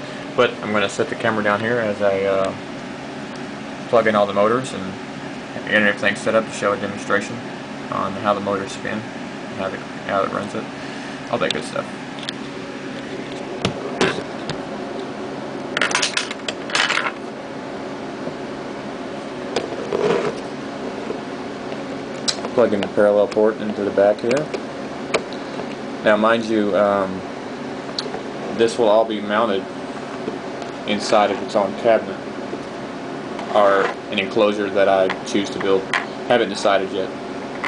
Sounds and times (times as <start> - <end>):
Speech: 0.4 - 2.6, 3.9 - 5.0, 5.6 - 10.7, 11.3 - 11.9, 22.4 - 24.6, 26.0 - 27.3, 28.5 - 29.7, 30.8 - 32.2, 33.5 - 37.2.